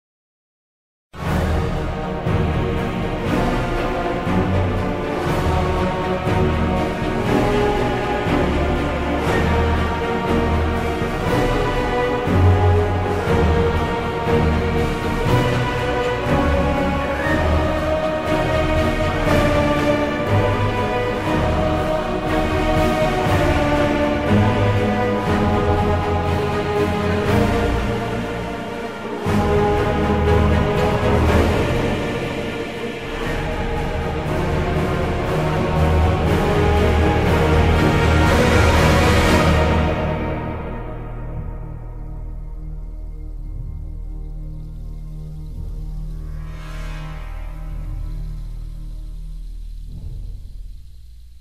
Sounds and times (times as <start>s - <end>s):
Soundtrack music: 1.2s - 51.4s.